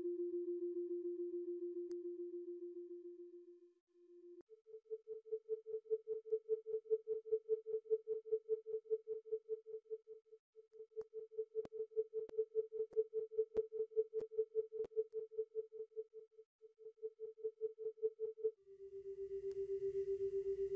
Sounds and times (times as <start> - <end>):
Electronic tuner: 0.0 - 20.7.